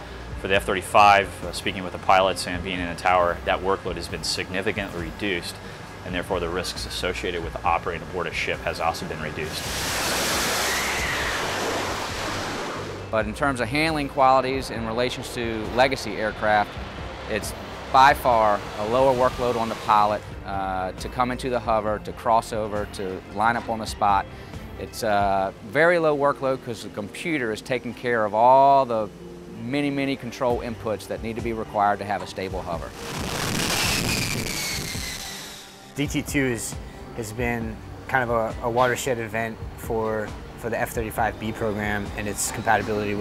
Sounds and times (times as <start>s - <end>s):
Music: 0.0s - 43.2s
Speech: 0.4s - 9.6s, 13.1s - 16.7s, 17.3s - 24.2s, 24.8s - 32.9s, 36.0s - 43.2s.